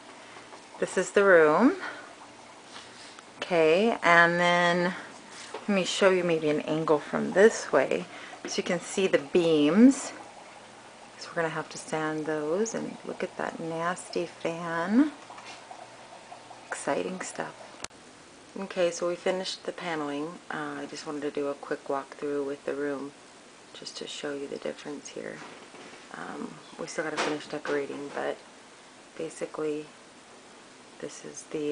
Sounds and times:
Speech: 0:03.4 - 0:05.0, 0:05.7 - 0:10.2, 0:11.2 - 0:15.2, 0:16.7 - 0:17.6, 0:18.6 - 0:23.2, 0:23.8 - 0:25.5, 0:26.1 - 0:28.4, 0:29.2 - 0:30.0, 0:31.0 - 0:31.7.

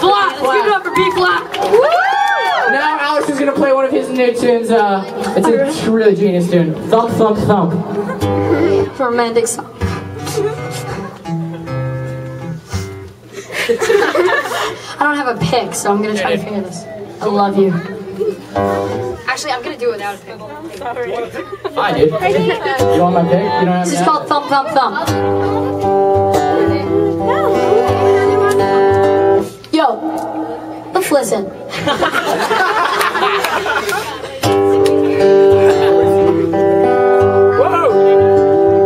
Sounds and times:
Music: 0:07.8 - 0:13.3, 0:18.6 - 0:19.3, 0:22.6 - 0:23.6, 0:25.0 - 0:31.2, 0:34.4 - 0:38.8
Chuckle, chortle: 0:10.2 - 0:11.8, 0:13.3 - 0:14.8, 0:35.5 - 0:36.4.

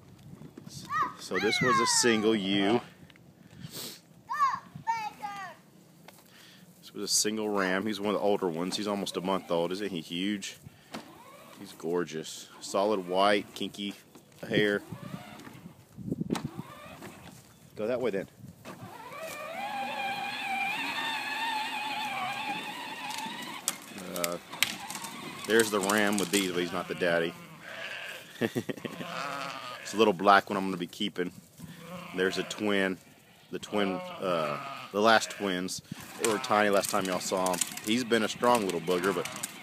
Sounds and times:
Speech: 0:00.7 - 0:02.9, 0:06.8 - 0:10.6, 0:17.8 - 0:18.3, 0:25.5 - 0:27.3, 0:29.9 - 0:31.3, 0:33.6 - 0:39.3.

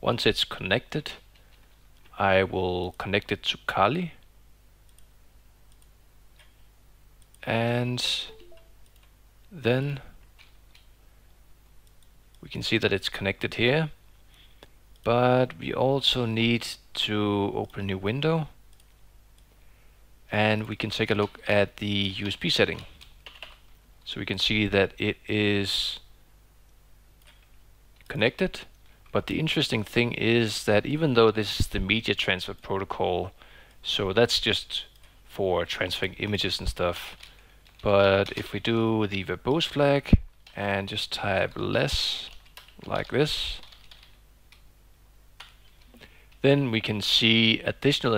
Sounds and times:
Speech: 0:00.0 - 0:01.3, 0:02.1 - 0:04.2, 0:07.4 - 0:08.5, 0:09.5 - 0:10.1, 0:12.4 - 0:14.0, 0:15.0 - 0:18.6, 0:20.3 - 0:22.9, 0:24.1 - 0:26.1, 0:28.1 - 0:37.2, 0:37.8 - 0:43.7, 0:46.4 - 0:48.1.

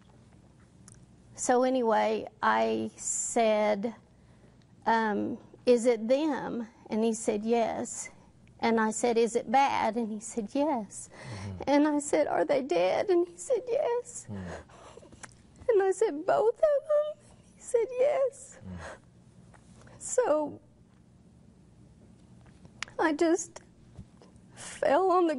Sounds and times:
Female speech, woman speaking: 0:01.4 - 0:04.0, 0:04.9 - 0:11.1, 0:11.7 - 0:14.3, 0:15.7 - 0:18.6, 0:20.0 - 0:20.6, 0:22.9 - 0:23.6, 0:24.8 - 0:25.3.

